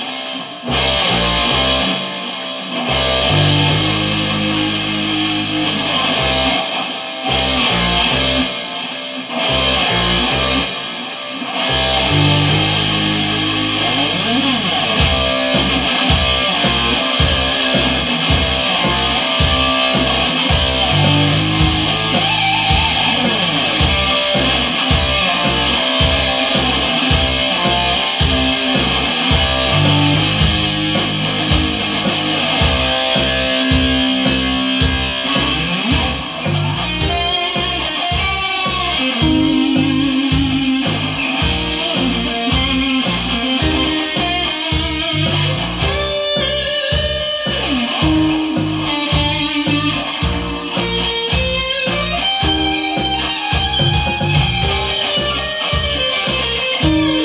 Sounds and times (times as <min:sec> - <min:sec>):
Strum: 0:00.0 - 0:57.2.